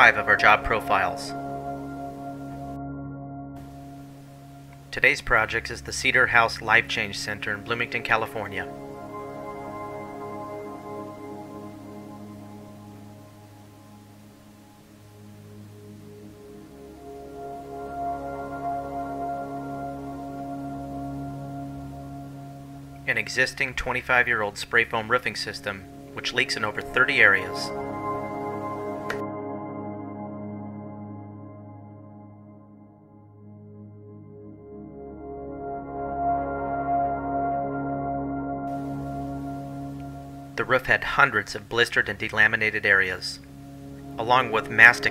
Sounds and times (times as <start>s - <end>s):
Speech: 0.0s - 1.4s, 5.0s - 8.7s, 23.1s - 27.7s, 40.6s - 43.4s, 44.2s - 45.1s
Music: 0.0s - 45.1s.